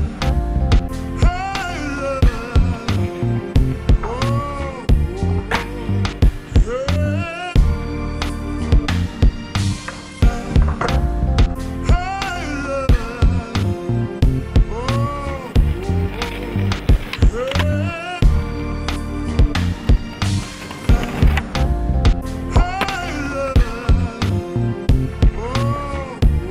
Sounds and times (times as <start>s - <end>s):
Music: 0.0s - 26.5s
Skateboard: 15.4s - 18.1s, 19.5s - 21.7s, 22.6s - 23.2s.